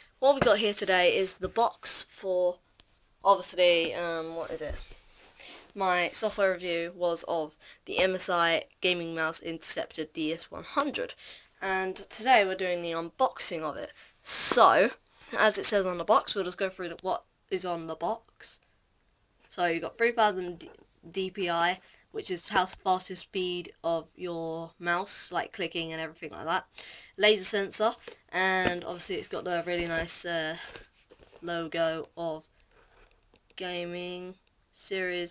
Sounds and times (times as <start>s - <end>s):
Speech: 0.2s - 2.6s, 3.2s - 4.8s, 5.8s - 18.6s, 19.5s - 30.8s, 31.4s - 32.5s, 33.6s - 35.3s.